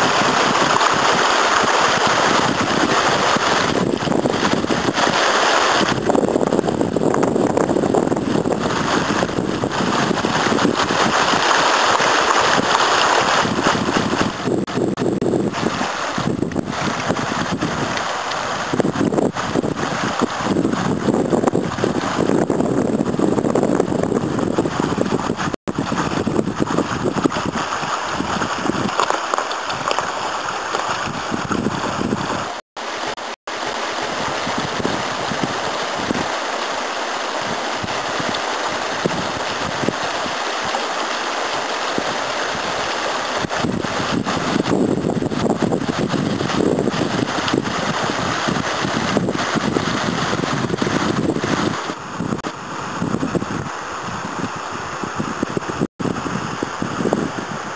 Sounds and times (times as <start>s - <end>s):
Stream: 0.0s - 57.7s.